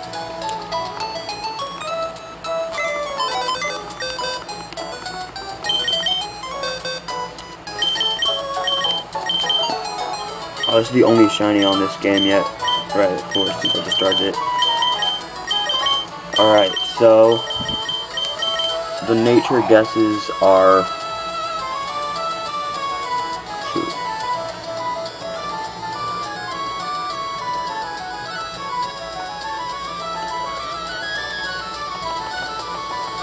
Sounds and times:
Music: 0:00.0 - 0:33.2
Speech: 0:10.7 - 0:14.4, 0:16.4 - 0:17.4, 0:19.0 - 0:20.9.

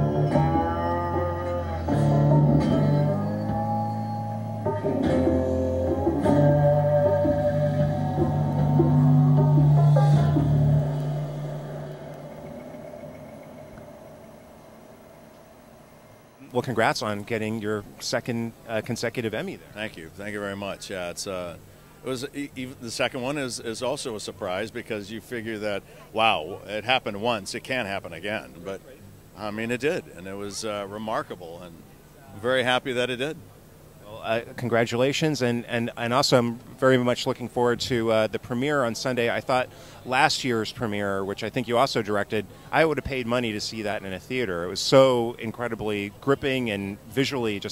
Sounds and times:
Speech: 0:16.4 - 0:33.4, 0:34.0 - 0:47.7.

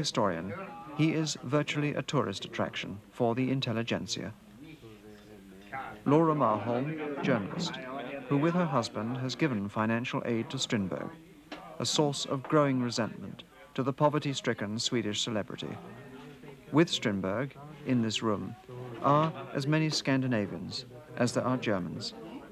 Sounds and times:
Speech: 0:00.0 - 0:22.5.

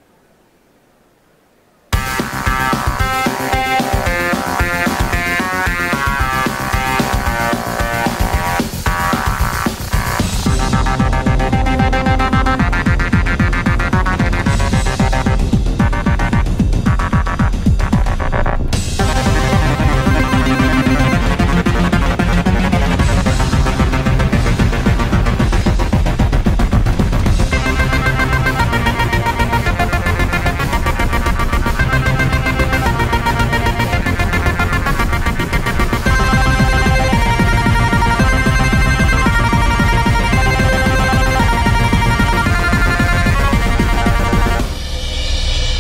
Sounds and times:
Musical instrument: 0:02.0 - 0:45.0.

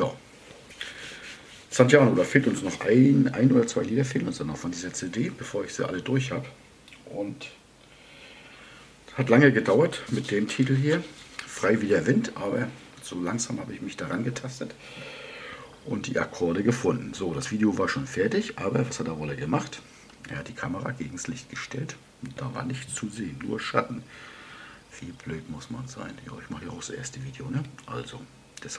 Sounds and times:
Speech: 0:00.0 - 0:00.2, 0:01.7 - 0:07.6, 0:09.1 - 0:14.8, 0:15.8 - 0:24.1, 0:24.9 - 0:28.7.

